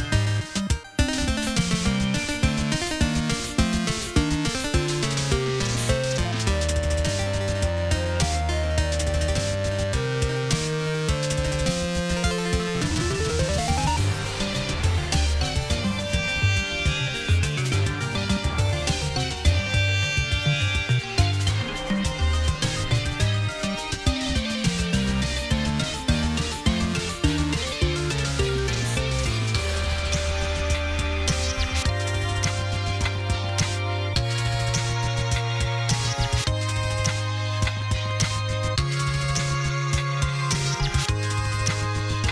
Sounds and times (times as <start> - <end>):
Soundtrack music: 0.0 - 42.3
Video game music: 0.0 - 42.3.